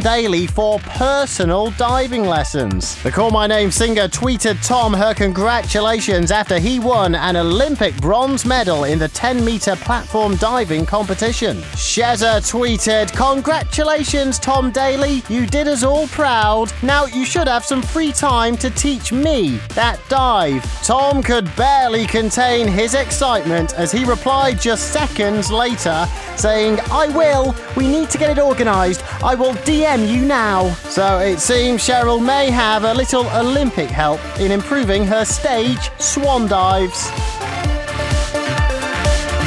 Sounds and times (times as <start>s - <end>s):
Speech: 0.0s - 37.1s
Music: 0.0s - 39.4s.